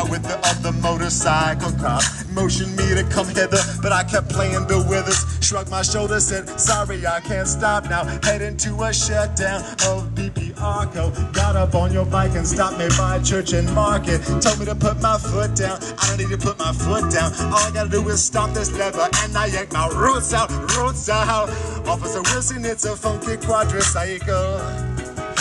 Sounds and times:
Music: 0.0s - 25.4s.

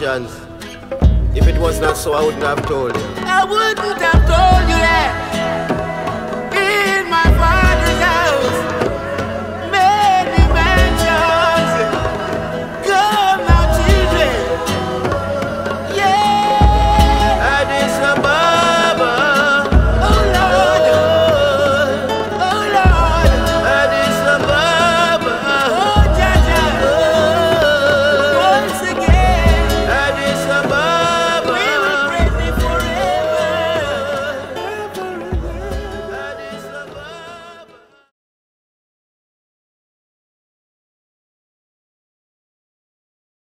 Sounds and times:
Country: 0.0s - 38.0s.

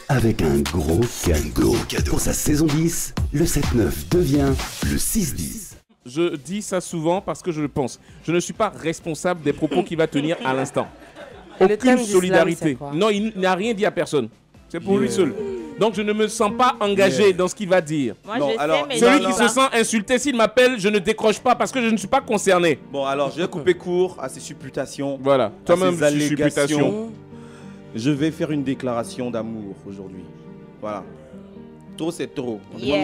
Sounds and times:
Speech: 0.0s - 10.9s, 11.6s - 27.1s, 32.0s - 33.0s
Music: 0.0s - 33.0s.

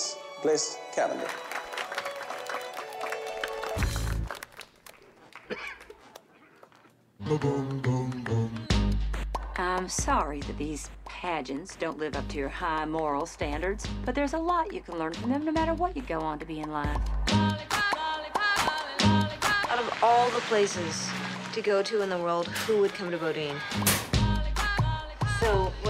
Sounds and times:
Music: 0.0s - 4.4s, 7.2s - 25.9s
Speech: 9.6s - 17.0s.

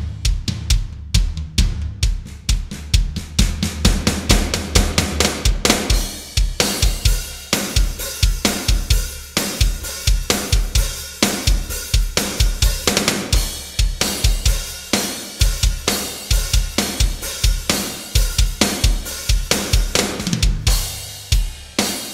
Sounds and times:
Music: 0.0s - 22.1s.

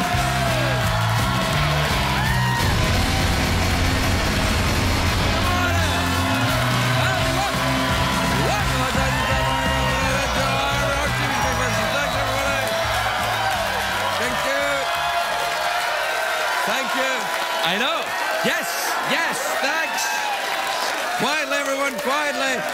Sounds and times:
Music: 0.0s - 15.6s.

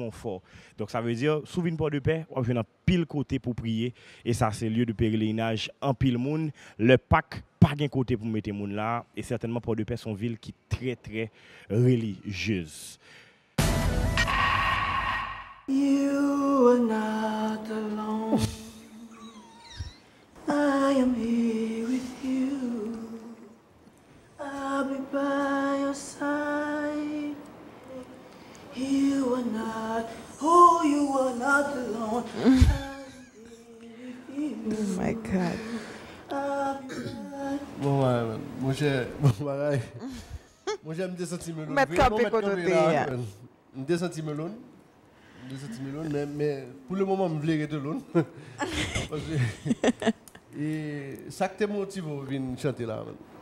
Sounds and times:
Inside, large room or hall: 14.1s - 23.6s
Singing: 15.7s - 19.8s, 20.4s - 23.6s, 24.4s - 38.1s.

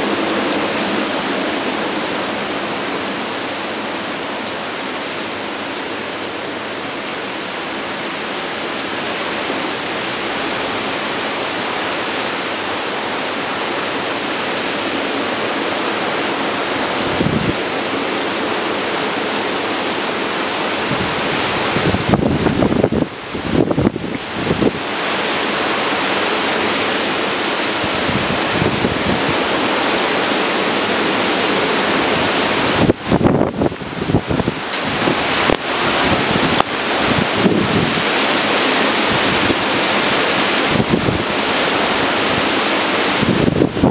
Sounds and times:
Waterfall: 0.0s - 43.9s
White noise: 0.0s - 43.9s.

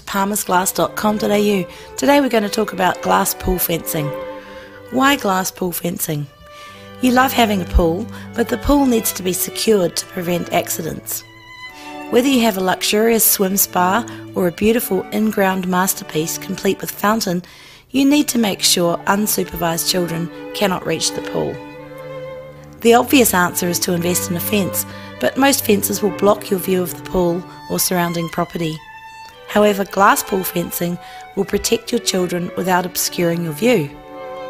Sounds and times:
Speech: 0.0s - 4.2s, 4.9s - 6.3s, 7.0s - 11.2s, 12.1s - 21.6s, 22.8s - 28.8s, 29.5s - 33.9s
Music: 0.0s - 34.5s.

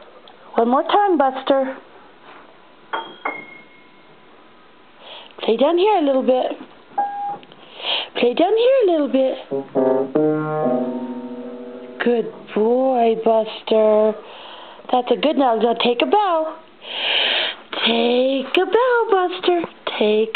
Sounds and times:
Piano: 9.4s - 12.6s.

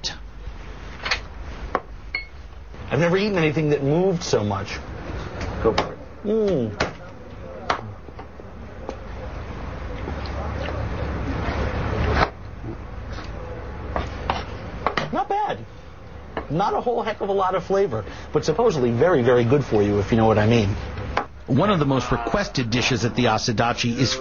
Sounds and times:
Speech: 21.5s - 24.2s.

